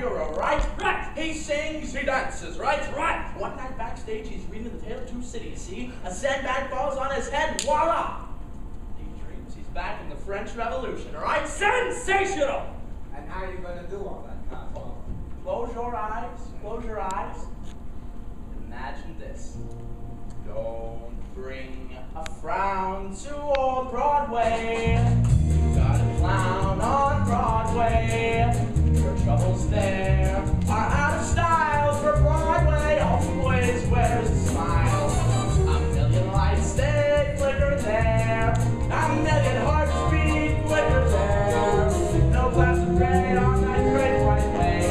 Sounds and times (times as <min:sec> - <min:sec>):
Music: 0:19.5 - 0:20.8, 0:24.3 - 0:44.9.